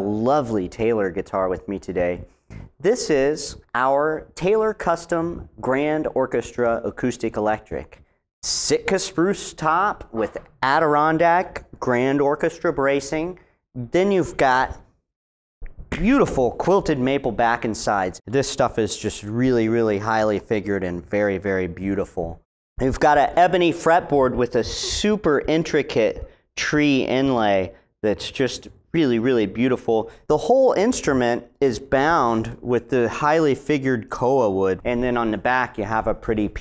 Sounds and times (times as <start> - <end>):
Speech: 0.0 - 14.9, 15.9 - 36.6.